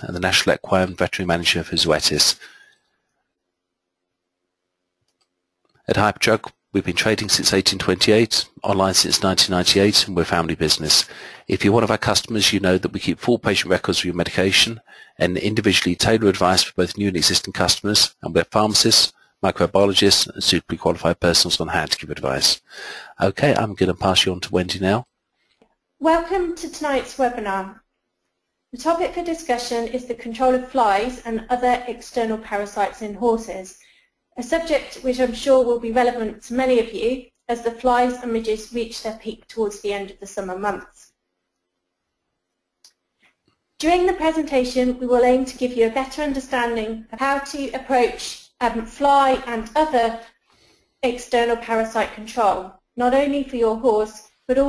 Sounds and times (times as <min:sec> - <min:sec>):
Speech: 0:00.0 - 0:02.5, 0:05.9 - 0:25.0, 0:26.0 - 0:27.8, 0:28.8 - 0:33.8, 0:34.4 - 0:41.0, 0:43.8 - 0:50.2, 0:51.0 - 0:54.6.